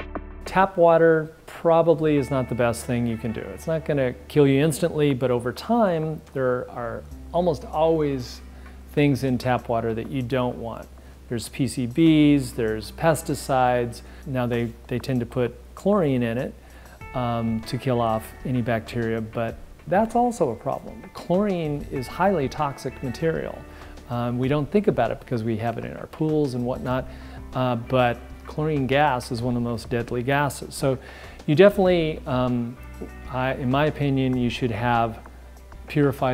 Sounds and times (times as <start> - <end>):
Music: 0.0 - 36.3
Speech: 0.5 - 35.2, 35.9 - 36.3.